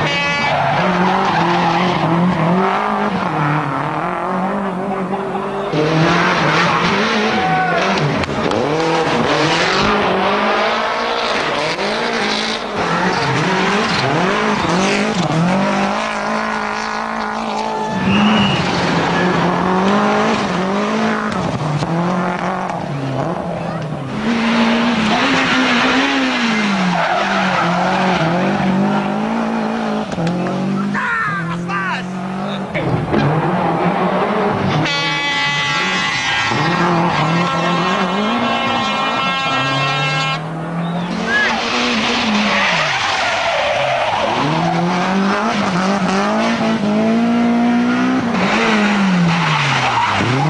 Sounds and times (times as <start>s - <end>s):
Car: 0.0s - 50.5s
Accelerating, revving, vroom: 0.7s - 31.0s, 32.1s - 50.5s
Speech: 30.8s - 33.0s.